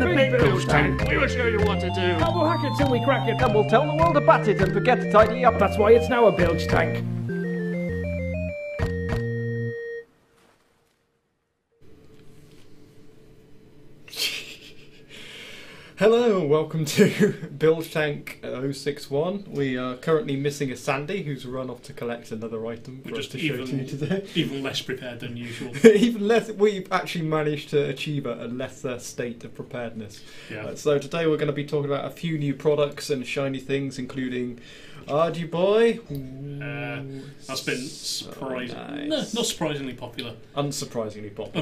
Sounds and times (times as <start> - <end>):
Speech: 0.0 - 7.0, 16.0 - 41.6
Music: 0.0 - 10.1.